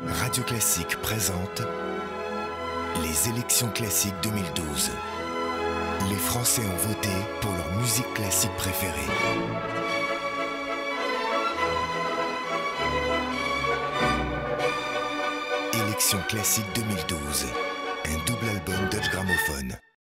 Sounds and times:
Speech: 0:00.0 - 0:01.7, 0:03.0 - 0:05.0, 0:06.0 - 0:09.2, 0:15.7 - 0:20.0
Music: 0:00.0 - 0:20.0.

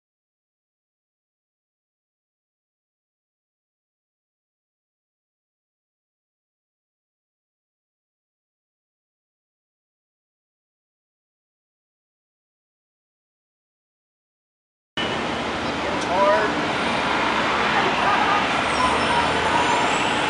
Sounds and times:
Bus: 0:15.0 - 0:20.2
Speech: 0:15.8 - 0:16.6, 0:18.0 - 0:19.6.

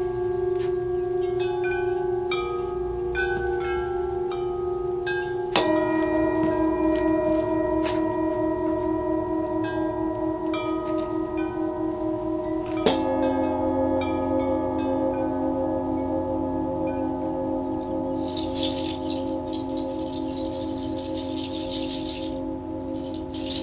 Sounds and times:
Tubular bells: 0:00.0 - 0:23.6.

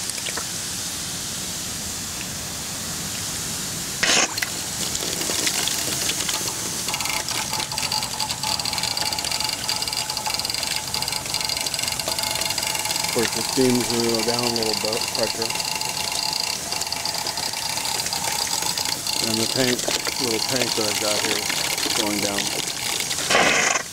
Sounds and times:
Pump (liquid): 0:00.0 - 0:23.9
Water: 0:00.0 - 0:23.9.

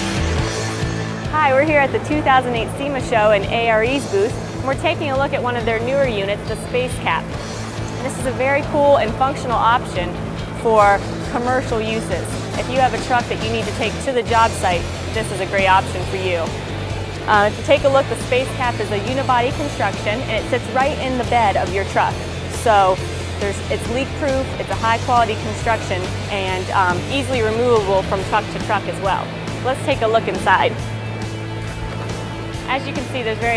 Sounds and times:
Music: 0:00.0 - 0:33.5
Speech: 0:01.4 - 0:07.2, 0:08.0 - 0:16.5, 0:17.3 - 0:30.8, 0:32.7 - 0:33.5.

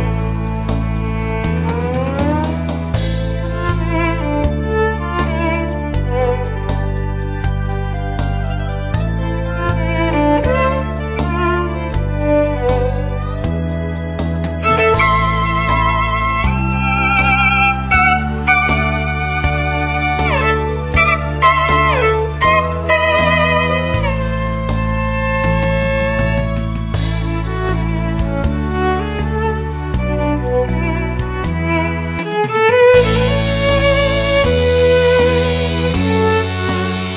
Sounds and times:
Classical music: 0:00.0 - 0:37.1
Violin, fiddle: 0:00.0 - 0:37.1.

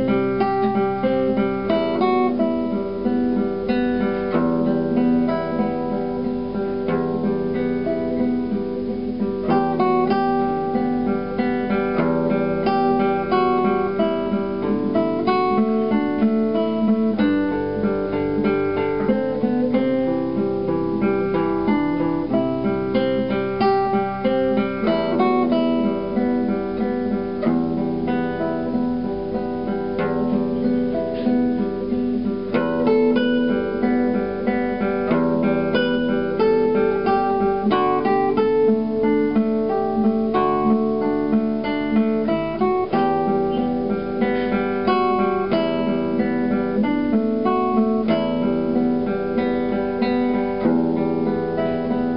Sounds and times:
Acoustic guitar: 0:00.0 - 0:52.1
Strum: 0:00.0 - 0:52.1.

